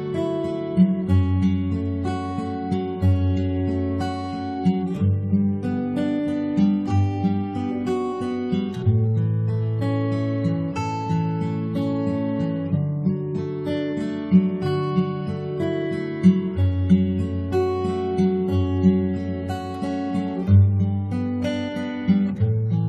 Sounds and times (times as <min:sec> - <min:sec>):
Acoustic guitar: 0:00.0 - 0:22.8.